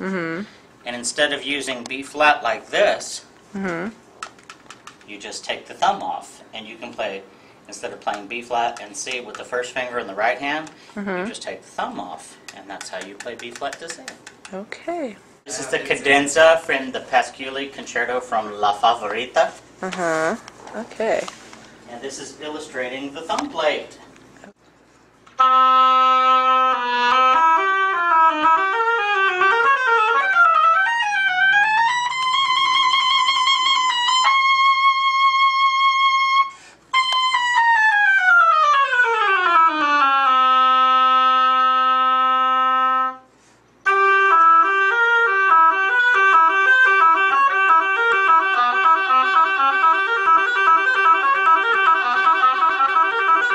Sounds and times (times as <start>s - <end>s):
Conversation: 0.0s - 24.6s.